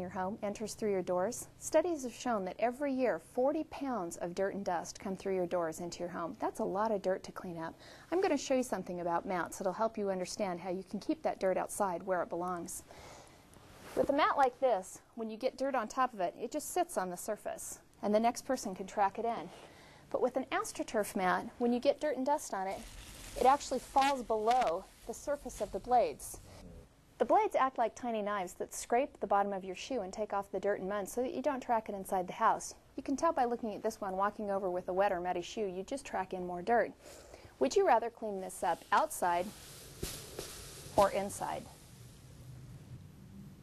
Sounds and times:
Speech: 0.0s - 12.8s, 14.0s - 22.8s, 23.4s - 26.4s, 27.2s - 37.0s, 37.6s - 39.5s, 41.0s - 41.7s.

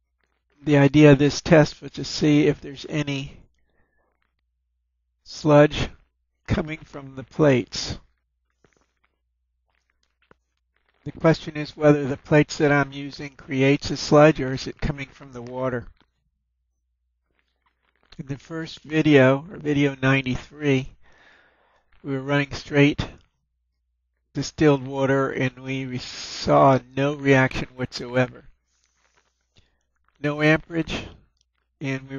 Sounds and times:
Speech: 0.6s - 3.4s, 5.3s - 8.0s, 11.1s - 15.9s, 18.2s - 21.0s, 22.0s - 23.2s, 24.4s - 28.5s, 30.2s - 31.2s, 31.8s - 32.1s.

